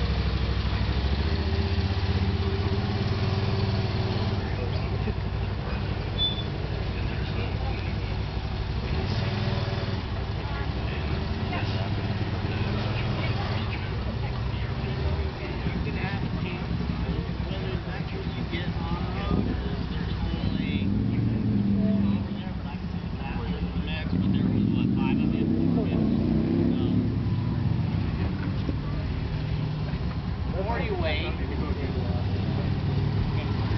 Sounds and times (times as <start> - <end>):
Speech: 4.2 - 9.8, 10.4 - 27.1, 30.5 - 33.7.